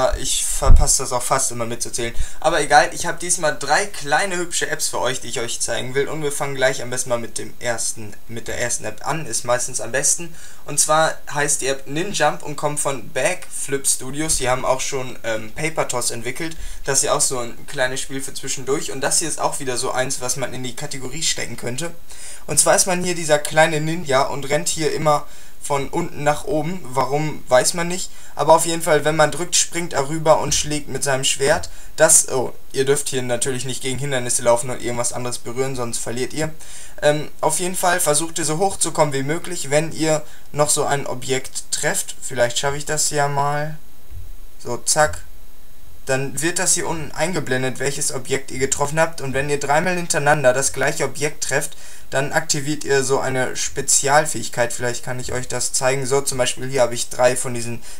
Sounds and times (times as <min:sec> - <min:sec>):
Speech: 0:00.0 - 0:43.8, 0:44.6 - 0:45.3, 0:46.1 - 0:57.8.